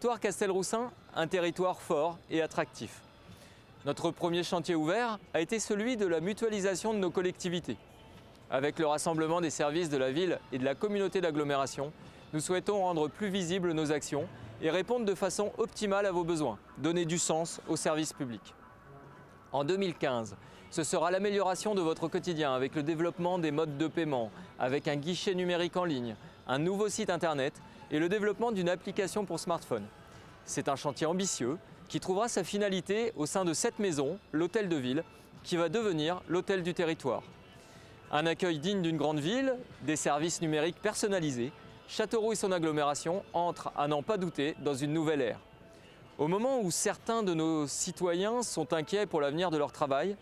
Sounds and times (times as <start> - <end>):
Speech: 0.0 - 3.0, 3.8 - 7.8, 8.5 - 18.5, 19.5 - 29.9, 30.5 - 37.3, 38.1 - 45.4, 46.2 - 50.2.